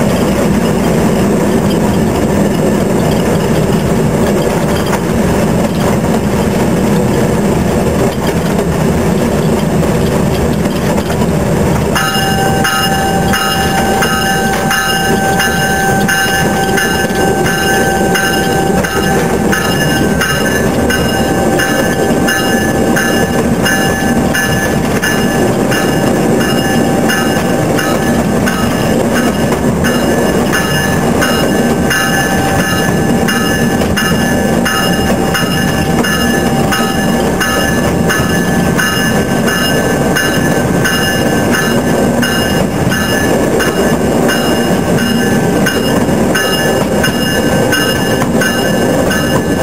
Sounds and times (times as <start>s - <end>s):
Outside, urban or manmade: 0.0s - 49.6s
Train: 0.0s - 49.6s.